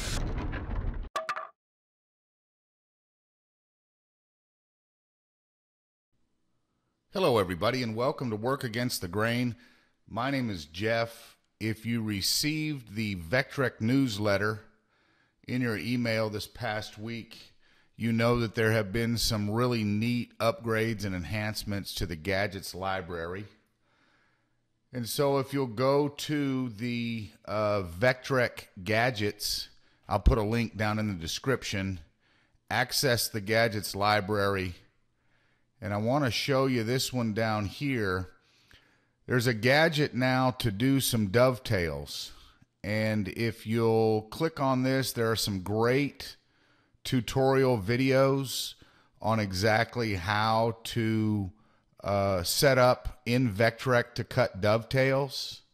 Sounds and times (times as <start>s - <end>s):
Speech: 7.1s - 14.7s, 15.5s - 23.6s, 24.9s - 32.1s, 32.7s - 34.9s, 35.8s - 38.4s, 39.3s - 46.4s, 47.0s - 55.7s.